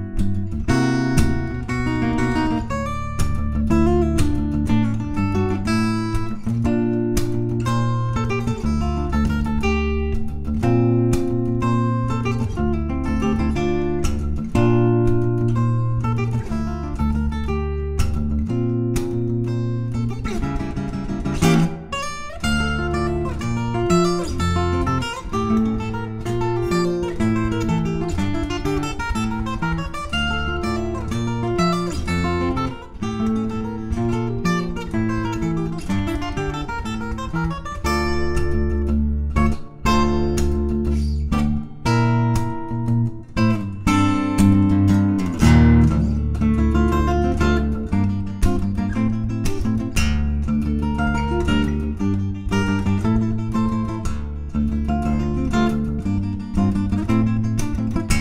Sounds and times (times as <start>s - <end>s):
Acoustic guitar: 0.0s - 58.2s.